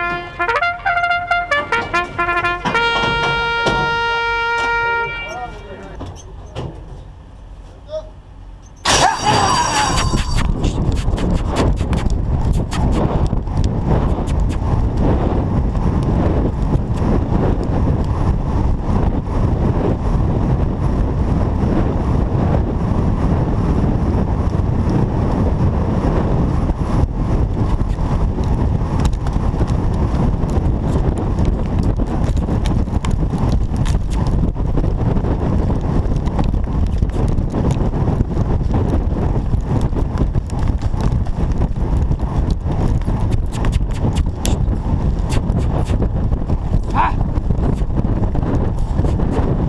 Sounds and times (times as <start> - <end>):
Clip-clop: 9.2 - 49.6.